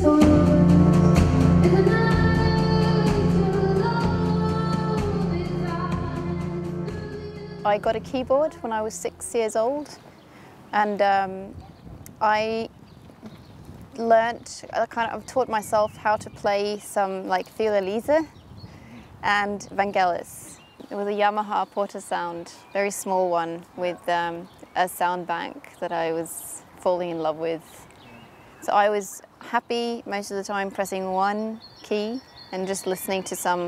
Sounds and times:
Speech: 0:07.7 - 0:10.0, 0:10.8 - 0:11.6, 0:12.2 - 0:12.7, 0:14.0 - 0:18.3, 0:19.2 - 0:33.6.

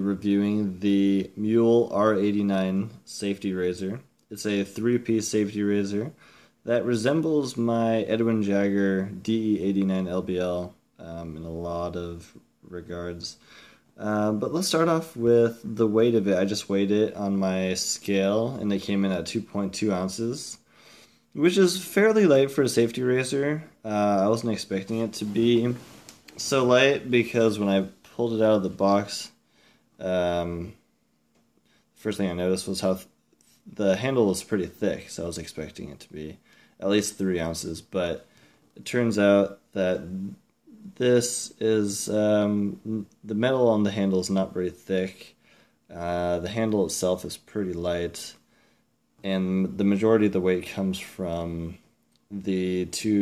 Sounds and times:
Speech: 0:00.0 - 0:13.4, 0:14.0 - 0:20.7, 0:21.4 - 0:29.4, 0:30.0 - 0:30.8, 0:32.0 - 0:48.4, 0:49.2 - 0:53.2.

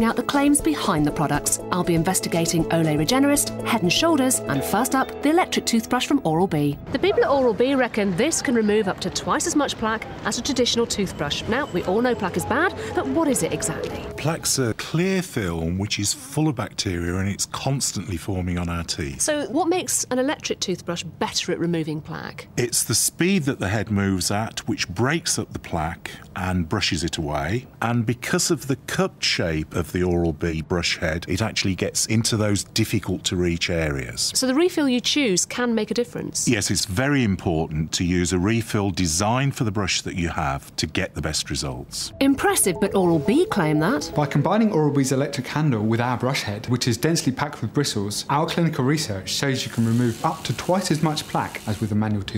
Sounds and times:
Speech: 0:00.1 - 0:52.3.

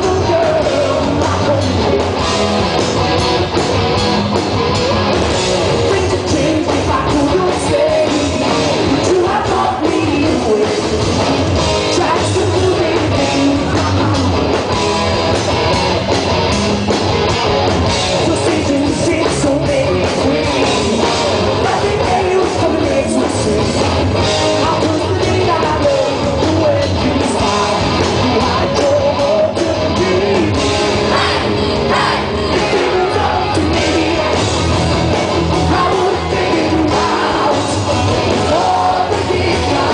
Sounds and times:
Singing: 0:00.0 - 0:02.2, 0:05.9 - 0:10.9, 0:18.3 - 0:23.9, 0:24.6 - 0:34.6, 0:35.6 - 0:39.9
Inside, large room or hall: 0:00.0 - 0:39.9
Music: 0:00.0 - 0:39.9.

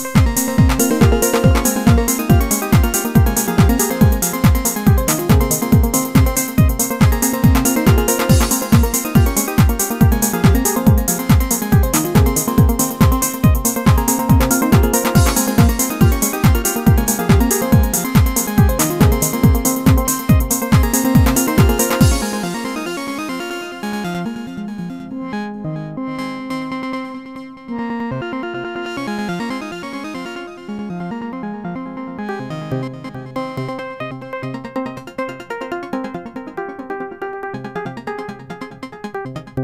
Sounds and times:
Music: 0:00.0 - 0:39.6.

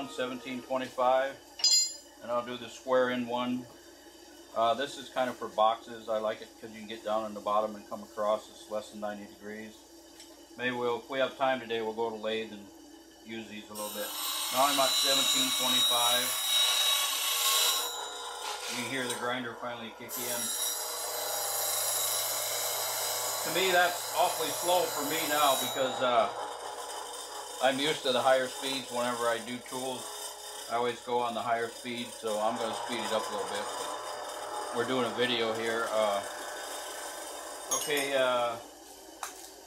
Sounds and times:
Speech: 0:00.0 - 0:01.4, 0:02.2 - 0:03.7, 0:04.6 - 0:09.8, 0:10.6 - 0:12.7, 0:13.3 - 0:16.4, 0:18.7 - 0:20.5, 0:23.4 - 0:26.4, 0:27.6 - 0:30.1, 0:30.7 - 0:33.8, 0:34.7 - 0:36.3, 0:37.7 - 0:38.6.

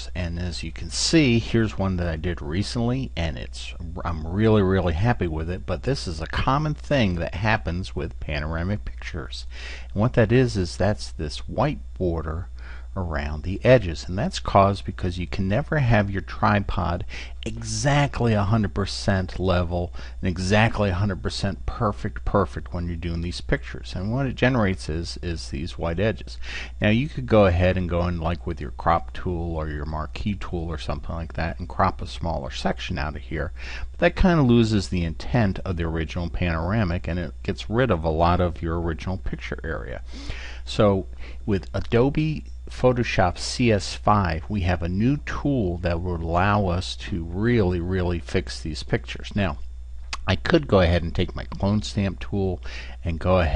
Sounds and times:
Speech: 0:00.0 - 0:49.6, 0:50.2 - 0:53.5.

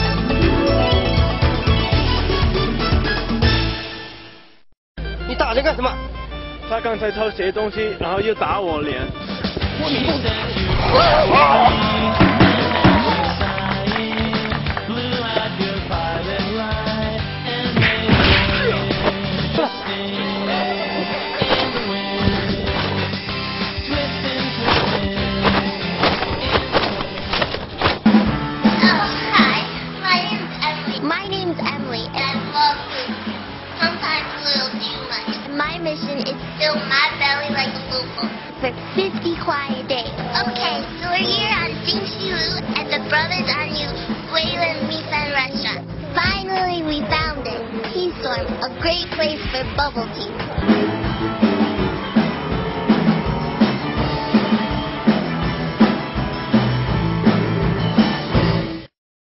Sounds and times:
Music: 0:00.0 - 0:58.9.

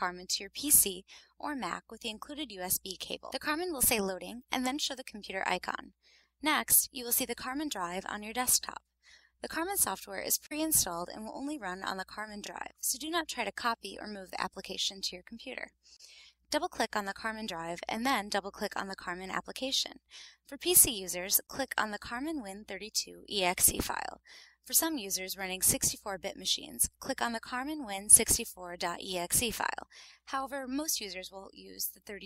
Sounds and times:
Speech: 0:00.0 - 0:08.8, 0:09.4 - 0:15.7, 0:16.5 - 0:32.2.

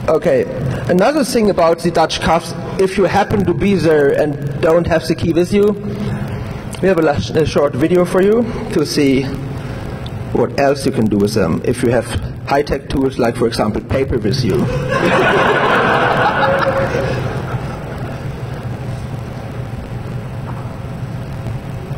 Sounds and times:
Speech: 0:00.1 - 0:05.8, 0:06.8 - 0:09.4, 0:10.3 - 0:14.8
Laughter: 0:14.6 - 0:18.3.

